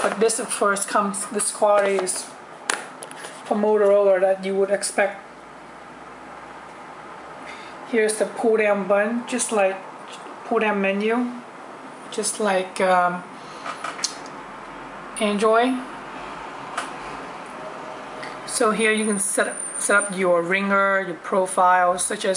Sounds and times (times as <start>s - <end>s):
Speech: 0.0s - 2.4s, 3.5s - 5.2s, 7.9s - 9.8s, 10.5s - 11.5s, 12.1s - 13.3s, 15.2s - 15.9s, 18.5s - 22.3s
Inside, small room: 0.0s - 22.3s.